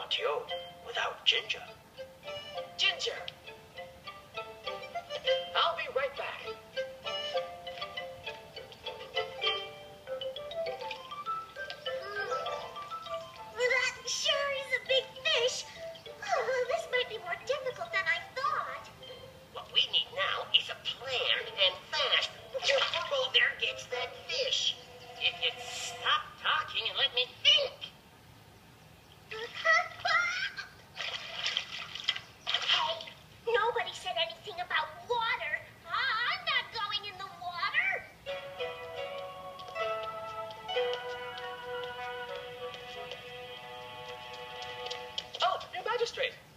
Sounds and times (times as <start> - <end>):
Music: 0.0 - 27.2, 38.1 - 46.2
Speech: 13.6 - 15.6, 16.2 - 18.9, 19.6 - 28.0, 32.8 - 38.1.